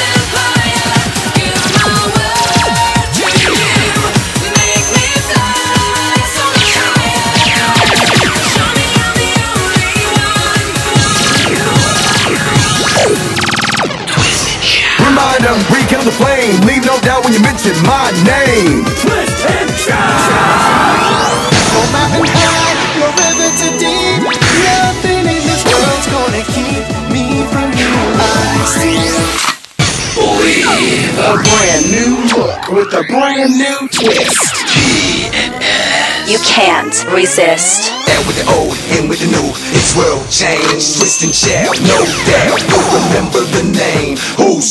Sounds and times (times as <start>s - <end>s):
Music: 0.0s - 44.7s.